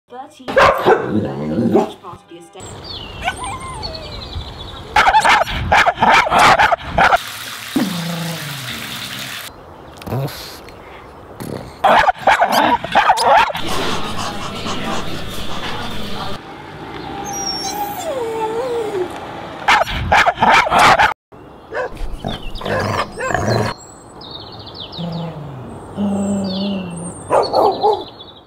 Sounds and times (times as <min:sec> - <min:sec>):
Speech: 0:00.1 - 0:02.7, 0:14.1 - 0:16.4
Outside, rural or natural: 0:00.1 - 0:15.8, 0:16.4 - 0:28.4
Dog: 0:00.6 - 0:01.1, 0:11.8 - 0:15.8, 0:27.3 - 0:28.1
Canidae, dogs, wolves: 0:00.6 - 0:02.0, 0:05.0 - 0:07.2, 0:11.8 - 0:16.4, 0:19.7 - 0:23.7, 0:25.0 - 0:28.2
Water tap, faucet: 0:07.0 - 0:09.5.